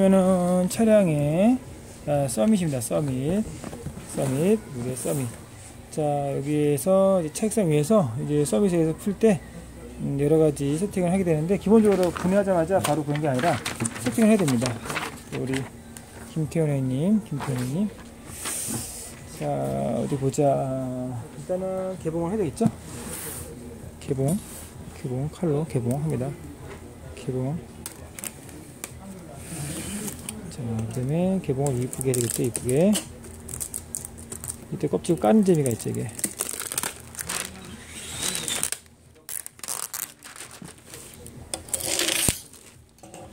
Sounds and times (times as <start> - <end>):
Speech: 0.0 - 18.1, 19.2 - 33.3, 34.7 - 36.3.